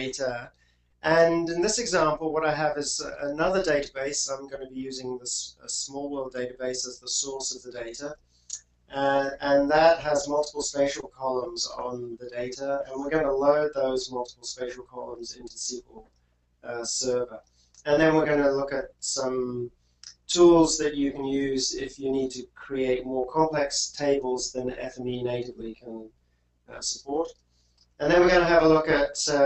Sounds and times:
Speech: 0:00.0 - 0:08.2, 0:08.9 - 0:16.0, 0:16.6 - 0:26.1, 0:26.7 - 0:27.4, 0:28.0 - 0:29.4.

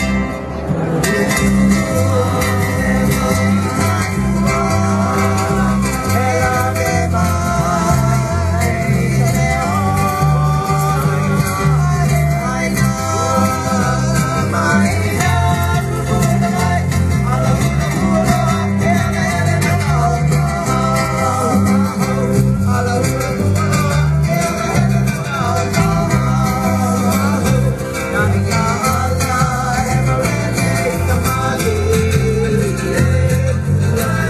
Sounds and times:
Music: 0:00.0 - 0:34.2
Singing: 0:01.1 - 0:34.2.

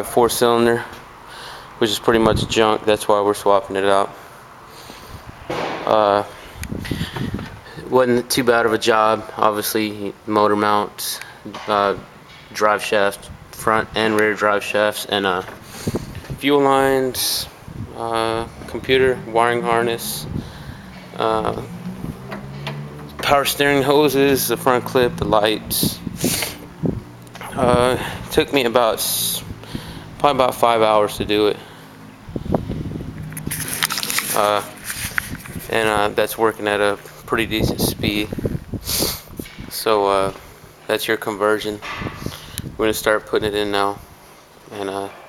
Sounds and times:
Speech: 0:00.0 - 0:00.9, 0:01.8 - 0:04.2, 0:05.8 - 0:06.3, 0:07.8 - 0:15.5, 0:16.4 - 0:20.3, 0:21.2 - 0:21.7, 0:23.2 - 0:26.1, 0:27.4 - 0:29.5, 0:30.2 - 0:31.6, 0:34.3 - 0:34.8, 0:35.7 - 0:38.4, 0:39.7 - 0:41.8, 0:42.8 - 0:44.0, 0:44.7 - 0:45.2.

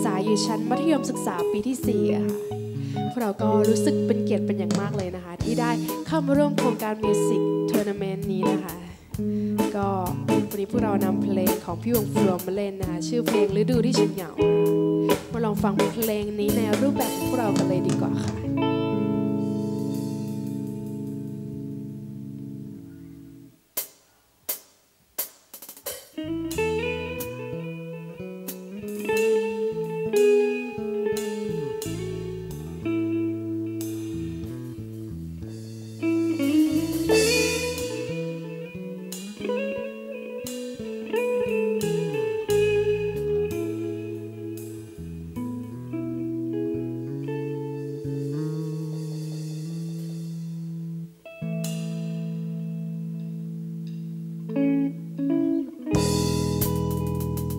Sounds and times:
Speech: 0:00.0 - 0:02.5, 0:03.1 - 0:09.0, 0:09.6 - 0:14.5, 0:15.1 - 0:18.6
Background music: 0:00.0 - 0:23.5, 0:26.2 - 0:57.5.

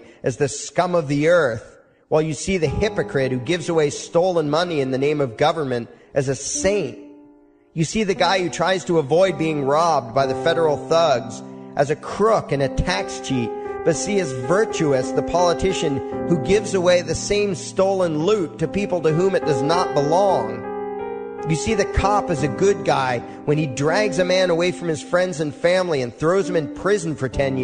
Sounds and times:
Male speech, man speaking: 0:00.0 - 0:07.0, 0:07.8 - 0:20.6, 0:21.5 - 0:27.6
Music: 0:00.0 - 0:27.6.

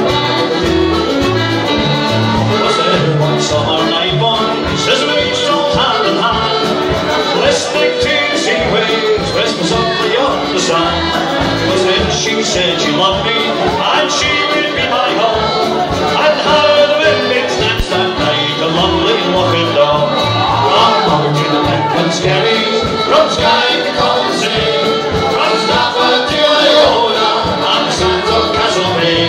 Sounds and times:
Hubbub, speech noise, speech babble: 0:00.0 - 0:29.2
Music: 0:00.0 - 0:29.2.

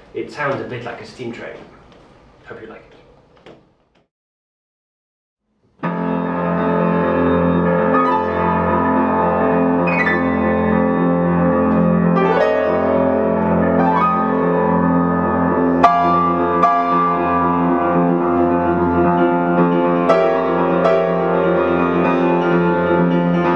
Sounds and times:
Music: 0:05.6 - 0:23.5.

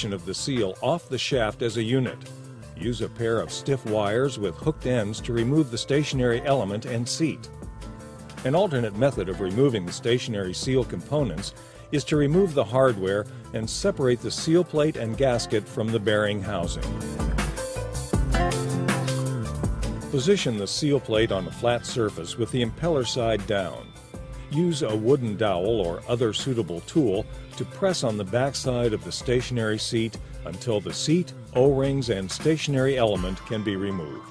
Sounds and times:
Speech: 0:00.0 - 0:07.5, 0:08.4 - 0:16.9, 0:20.1 - 0:23.9, 0:24.5 - 0:34.3
Music: 0:00.0 - 0:34.3.

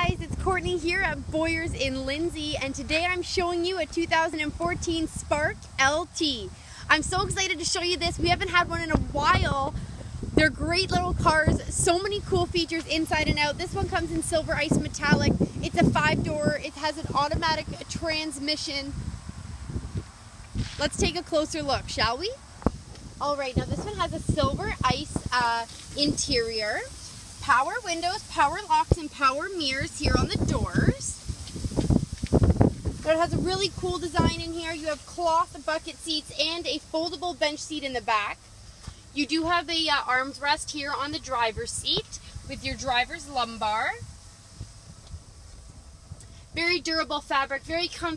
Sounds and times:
Speech: 0:00.0 - 0:09.8, 0:10.4 - 0:19.0, 0:20.7 - 0:22.4, 0:23.2 - 0:31.2, 0:33.0 - 0:38.4, 0:39.2 - 0:44.0, 0:46.6 - 0:48.1.

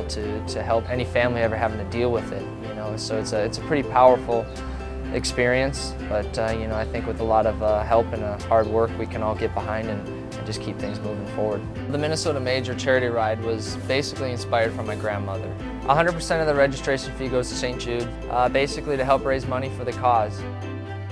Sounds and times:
Speech: 0:00.0 - 0:04.5, 0:05.1 - 0:20.4
Music: 0:00.0 - 0:21.1.

